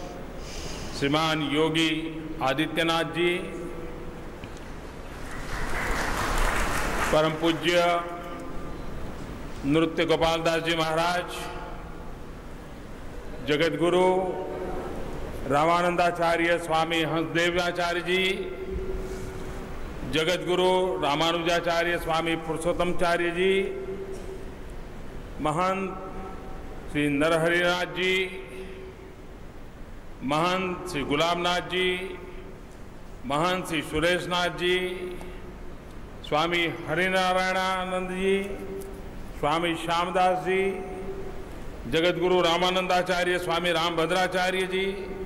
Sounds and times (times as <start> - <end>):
Narration, monologue: 0.0 - 45.2
Male speech, man speaking: 1.0 - 3.7, 7.1 - 8.2, 9.7 - 11.7, 13.4 - 14.7, 15.5 - 18.6, 20.1 - 23.8, 25.4 - 26.1, 27.0 - 28.5, 30.2 - 32.2, 33.3 - 35.2, 36.3 - 38.7, 39.4 - 41.0, 41.9 - 45.2.